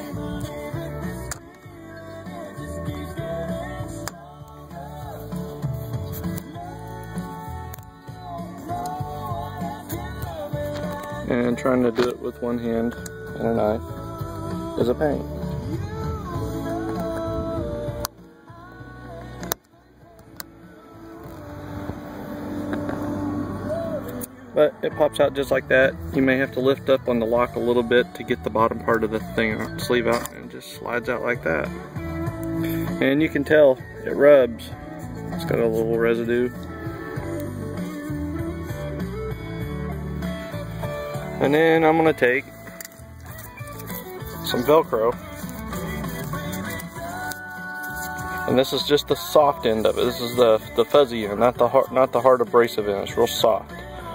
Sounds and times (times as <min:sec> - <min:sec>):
Music: 0:00.0 - 0:54.1
Speech: 0:11.3 - 0:13.8, 0:14.8 - 0:15.2, 0:24.6 - 0:31.7, 0:33.0 - 0:34.7, 0:35.4 - 0:36.6, 0:41.4 - 0:42.4, 0:44.4 - 0:45.2, 0:48.5 - 0:53.7.